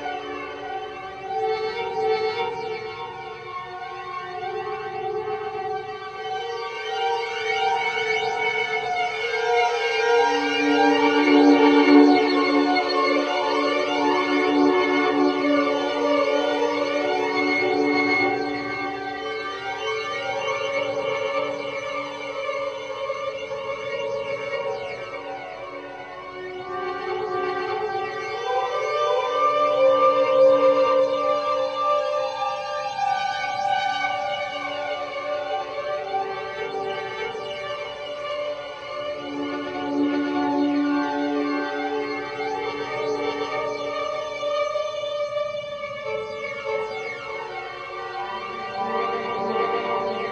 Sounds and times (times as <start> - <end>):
Music: 0.0 - 50.3.